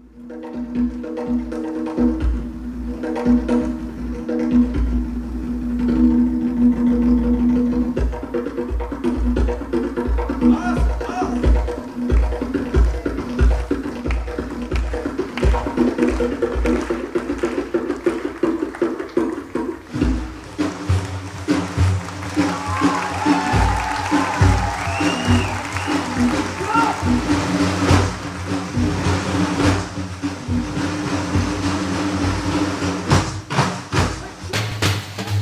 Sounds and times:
Percussion: 0.0s - 35.4s.

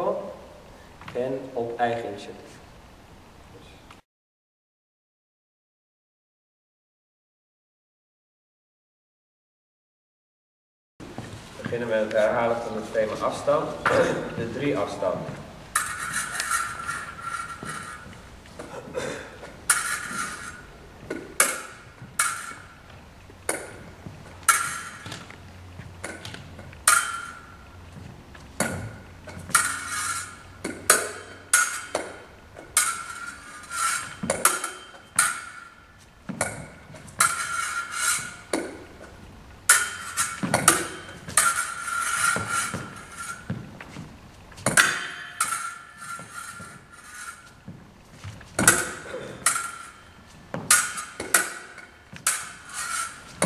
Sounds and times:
Speech: 0.0s - 0.4s, 1.1s - 2.6s, 11.6s - 15.4s.

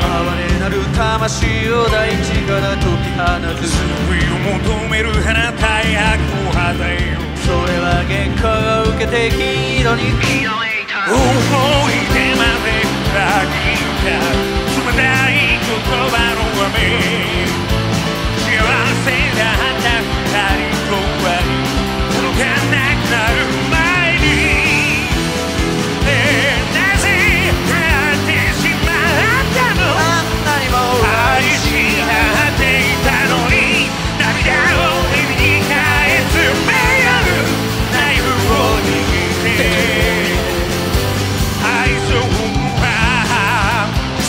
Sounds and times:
Music: 0.0s - 44.2s.

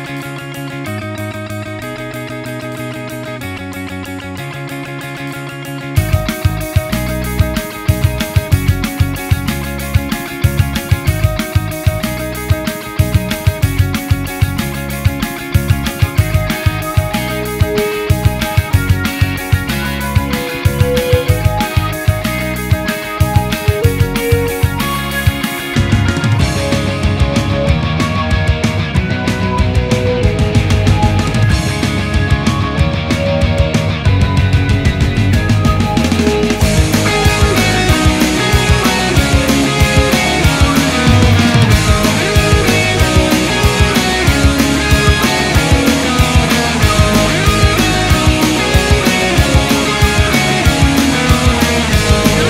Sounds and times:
Grunge: 0.0s - 52.4s.

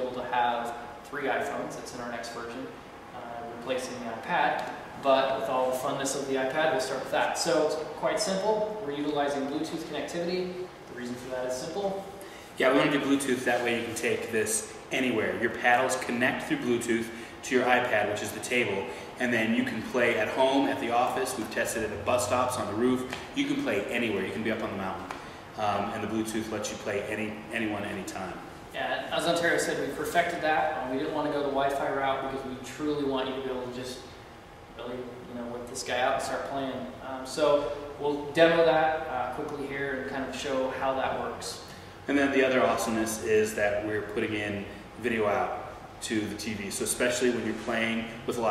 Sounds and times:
Speech: 0.0s - 34.1s, 34.8s - 48.5s.

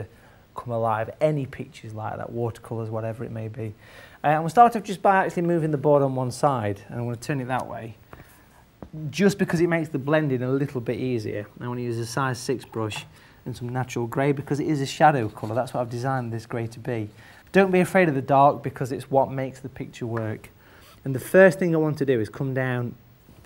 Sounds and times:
Speech: 0.0s - 8.0s, 8.9s - 23.4s.

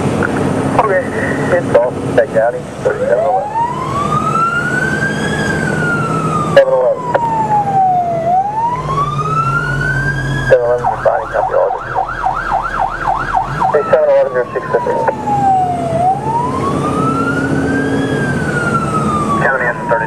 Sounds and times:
Truck: 0.0s - 20.0s
Fire engine, fire truck (siren): 0.7s - 20.0s
Speech: 6.6s - 7.1s, 10.5s - 11.8s, 13.8s - 15.2s, 19.4s - 20.0s.

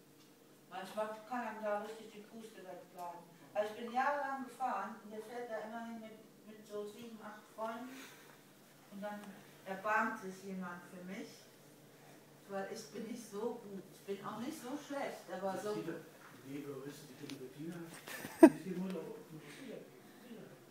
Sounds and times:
Speech: 12.5s - 20.6s.

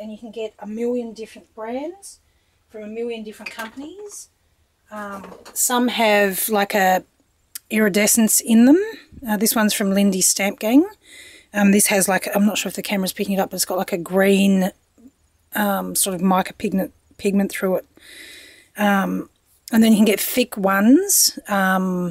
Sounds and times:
Speech: 0.0s - 4.3s, 4.9s - 7.0s, 7.6s - 11.0s, 11.6s - 14.8s, 15.6s - 17.8s, 18.8s - 22.1s.

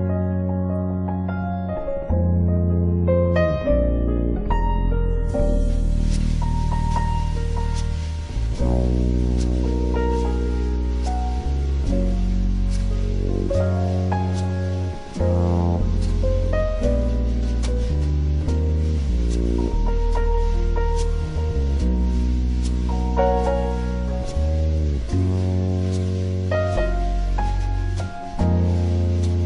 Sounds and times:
Music: 0.0s - 29.4s
Rustling leaves: 5.3s - 29.4s.

